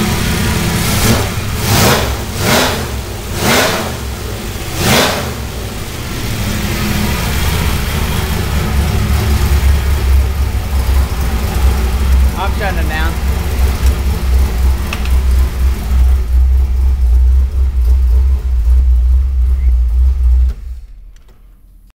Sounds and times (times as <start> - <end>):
Heavy engine (low frequency): 0.0 - 21.9
Vehicle: 0.0 - 21.9
Speech: 12.4 - 13.2.